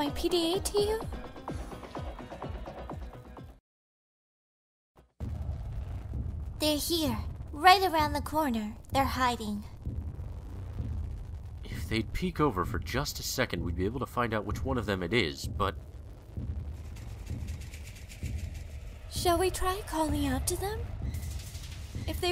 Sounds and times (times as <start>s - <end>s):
Speech: 0.0s - 1.1s, 6.6s - 9.7s, 11.7s - 15.8s, 19.1s - 20.9s, 22.1s - 22.3s.